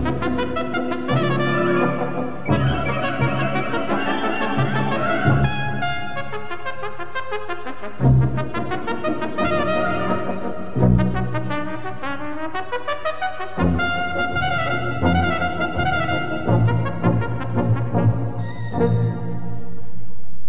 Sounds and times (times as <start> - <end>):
Trumpet: 0.0 - 19.9.